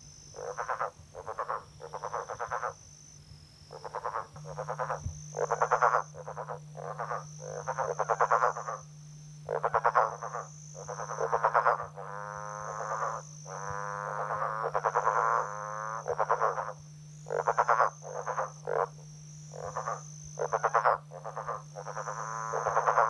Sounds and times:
Frog: 0.0 - 23.0.

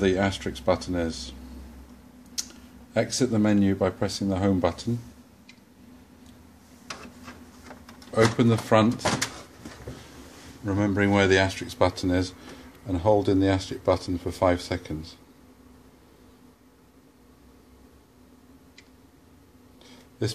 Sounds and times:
Speech: 0.0 - 1.4, 2.9 - 5.2, 8.1 - 9.3, 10.6 - 15.3.

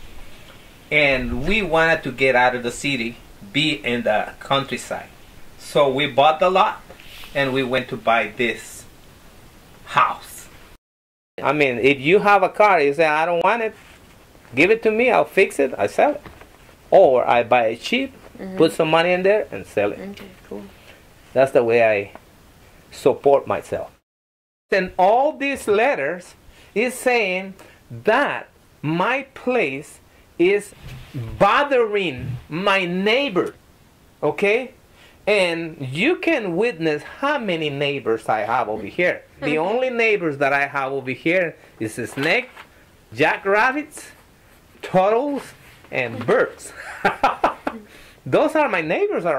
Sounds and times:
Speech: 0.9 - 8.9, 9.9 - 10.5, 11.4 - 13.8, 14.5 - 16.2, 16.9 - 20.7, 21.4 - 22.2, 22.9 - 24.0, 24.7 - 33.6, 34.2 - 44.2, 44.8 - 46.8, 47.8 - 49.3.

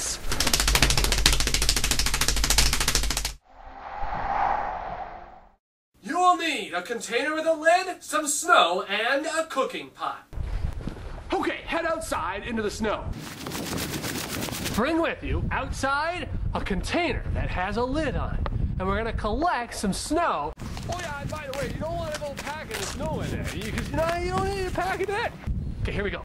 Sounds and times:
Speech: 6.0 - 10.3, 11.3 - 13.1, 14.8 - 26.2.

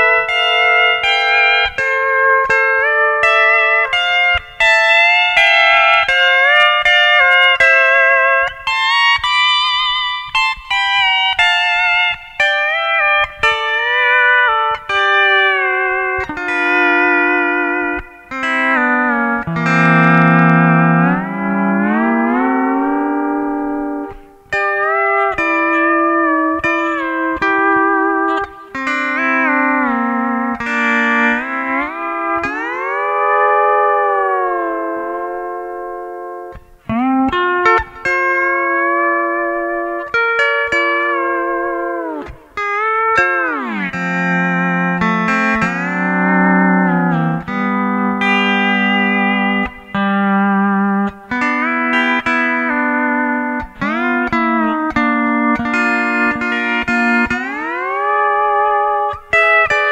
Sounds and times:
Musical instrument: 18.5 - 42.5.

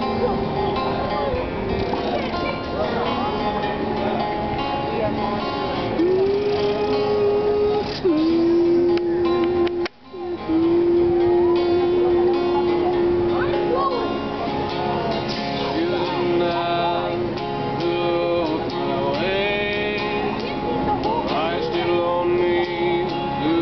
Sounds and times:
Music: 0.0 - 23.6.

